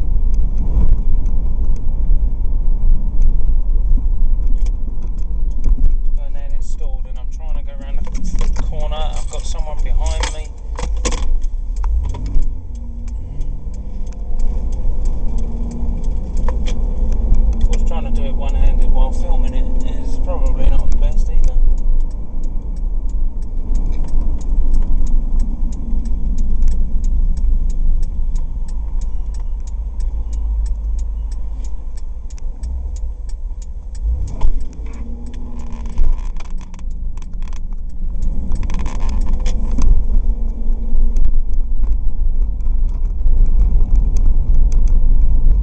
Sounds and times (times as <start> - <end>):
Car: 0.0 - 45.6.